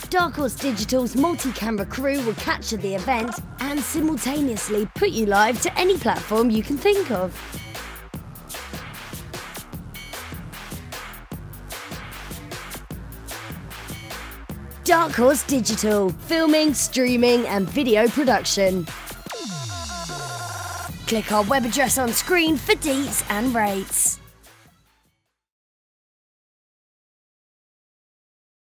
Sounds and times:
Speech: 0.0 - 7.4, 14.8 - 18.9, 21.0 - 24.2
Music: 0.0 - 25.5.

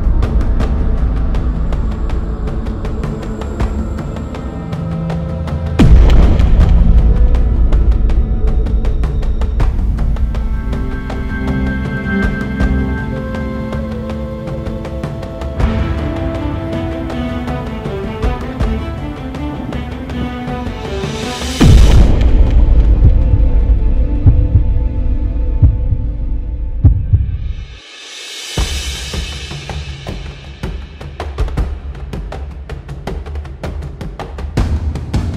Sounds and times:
Music: 0.0 - 35.3.

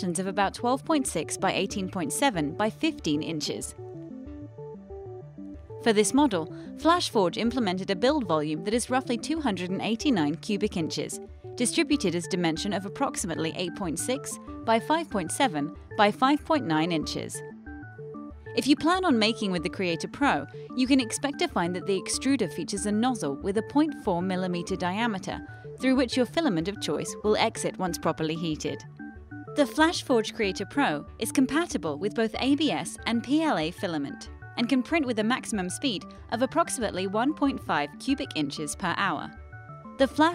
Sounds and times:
Speech: 0.0 - 3.8, 5.8 - 17.4, 18.6 - 28.8, 29.6 - 39.4, 40.0 - 40.3
Music: 0.0 - 40.3.

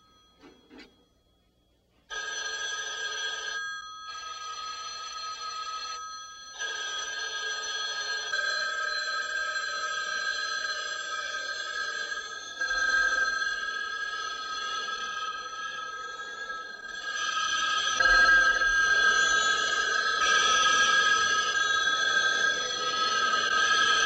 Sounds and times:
Telephone bell ringing: 0.0 - 24.0.

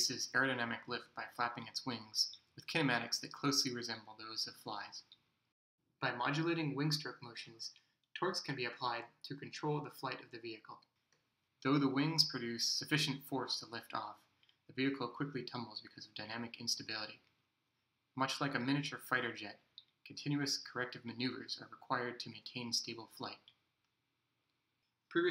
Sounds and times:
Speech: 0.0 - 5.2, 6.0 - 10.9, 11.6 - 17.3, 18.2 - 23.6.

